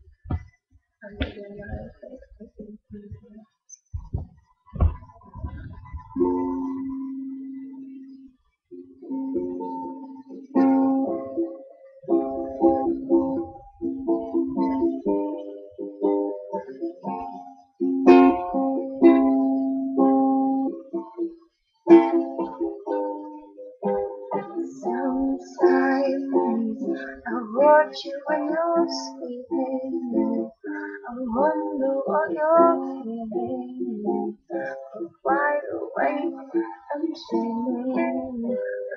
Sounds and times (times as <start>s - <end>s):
Inside, small room: 0.0s - 38.9s
Ukulele: 3.9s - 8.2s, 8.8s - 38.9s.